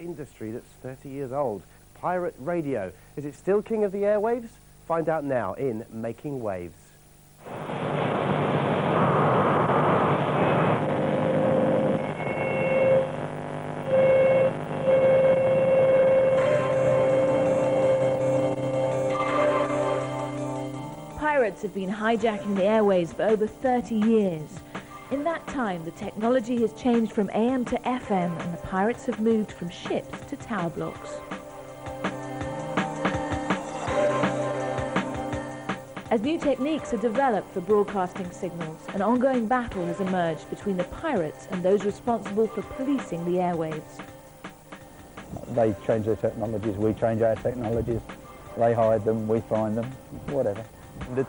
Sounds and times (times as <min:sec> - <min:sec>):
Music: 0:11.8 - 0:51.2.